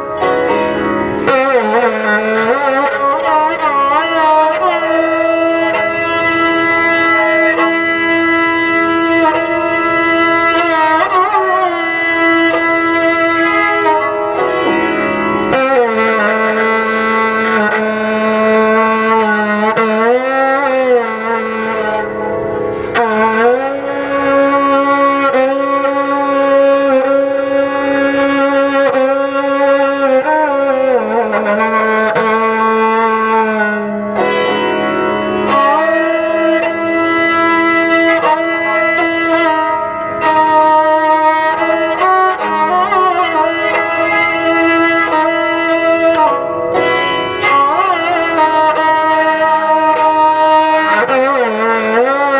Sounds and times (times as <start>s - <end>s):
Carnatic music: 0.0s - 52.3s
Musical instrument: 0.0s - 52.3s.